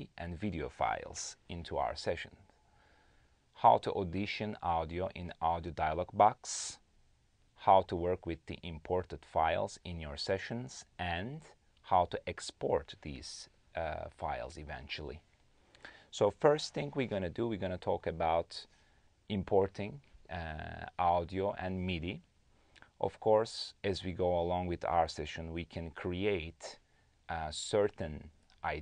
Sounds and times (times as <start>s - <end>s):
Speech: 0.0s - 2.5s, 3.6s - 6.9s, 7.6s - 15.2s, 16.1s - 18.7s, 19.3s - 22.3s, 23.0s - 28.8s.